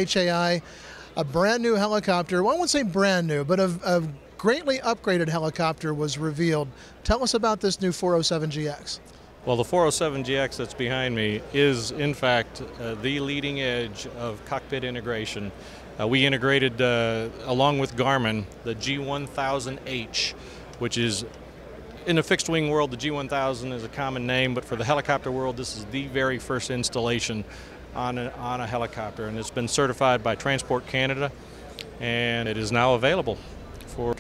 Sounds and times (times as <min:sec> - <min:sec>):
Speech: 0:00.0 - 0:00.6, 0:01.2 - 0:21.3, 0:22.0 - 0:31.4, 0:32.0 - 0:34.2.